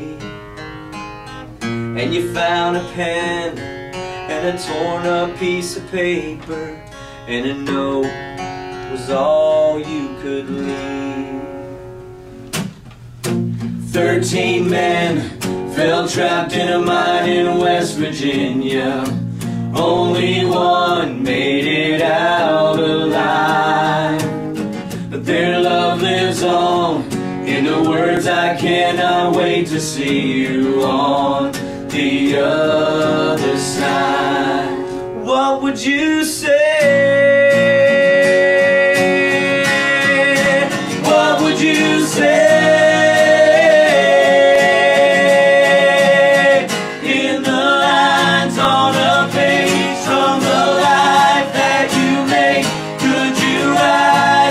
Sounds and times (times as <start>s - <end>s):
Acoustic guitar: 0.0s - 54.5s.